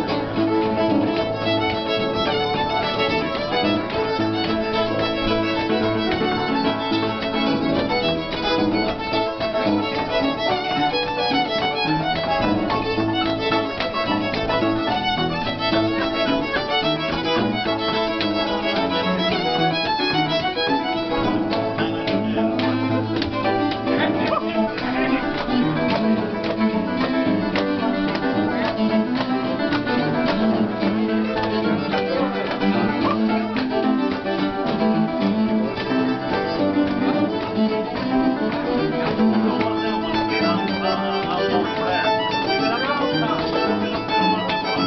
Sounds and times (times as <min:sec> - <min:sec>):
Violin, fiddle: 0:00.0 - 0:44.8.